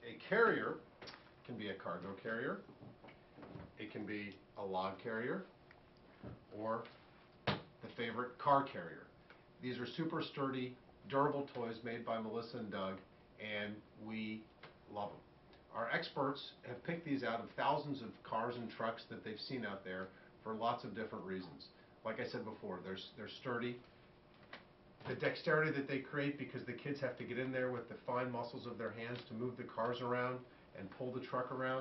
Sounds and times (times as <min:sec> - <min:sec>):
Speech: 0:00.0 - 0:02.7, 0:03.8 - 0:05.5, 0:06.5 - 0:07.0, 0:07.8 - 0:23.9, 0:25.0 - 0:31.8.